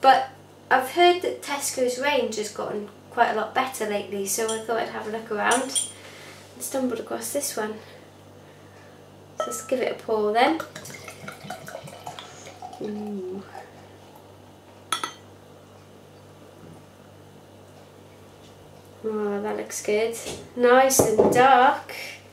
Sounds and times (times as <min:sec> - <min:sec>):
Water tap, faucet: 0:10.6 - 0:13.6.